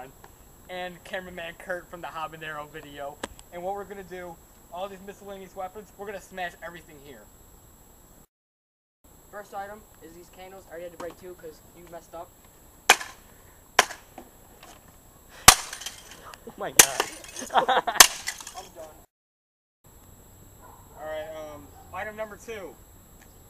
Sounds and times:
Speech: 0.7 - 7.3, 9.4 - 12.3, 18.6 - 19.1, 21.0 - 22.8.

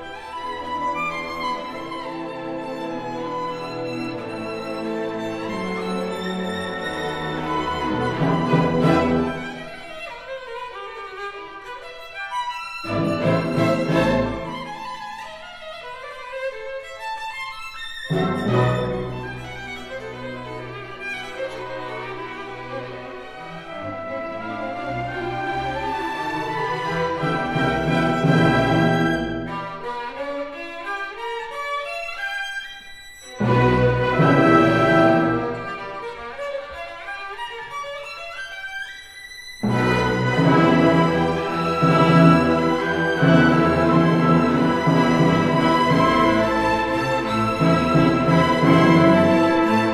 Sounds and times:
Violin, fiddle: 0.0 - 49.9.

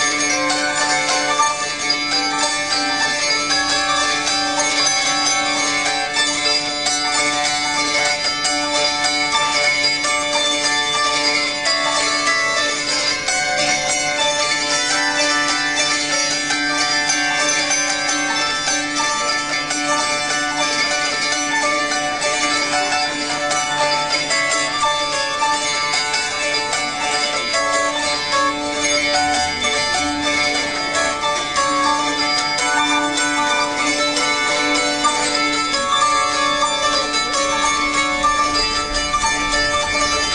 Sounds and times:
Zither: 0.0 - 40.3.

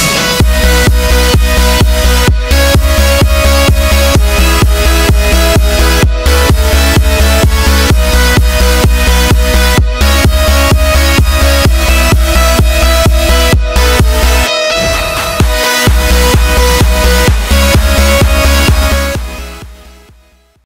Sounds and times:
Music: 0.0 - 20.6.

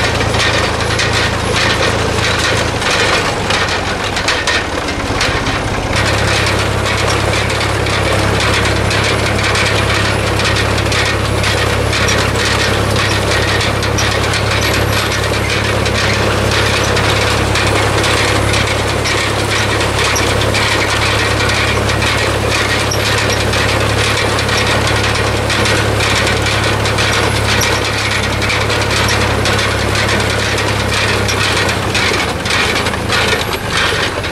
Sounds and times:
Vehicle: 0.0 - 34.3.

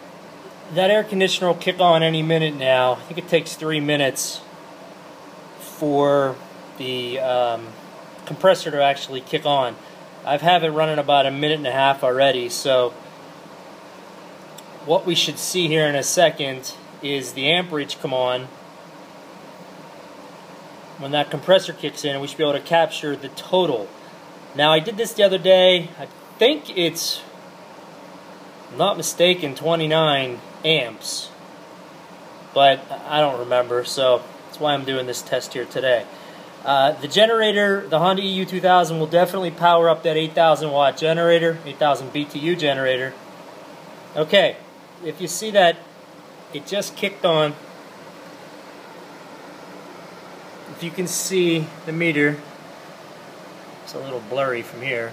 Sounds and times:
Speech: 0.7 - 4.5, 5.6 - 13.0, 14.8 - 18.6, 21.0 - 24.0, 24.6 - 27.3, 28.7 - 31.4, 32.6 - 43.2, 44.2 - 45.9, 46.5 - 47.6, 50.7 - 52.5, 53.8 - 55.1.

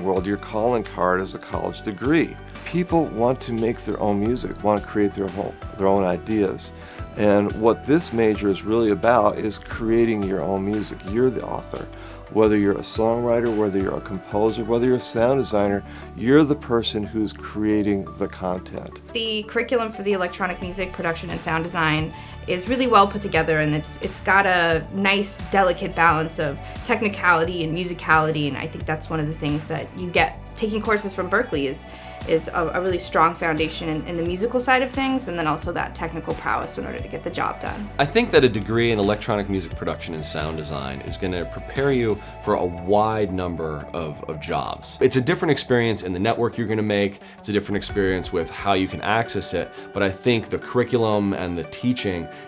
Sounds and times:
Speech: 0.0 - 11.8, 12.4 - 52.3
Music: 0.0 - 52.4.

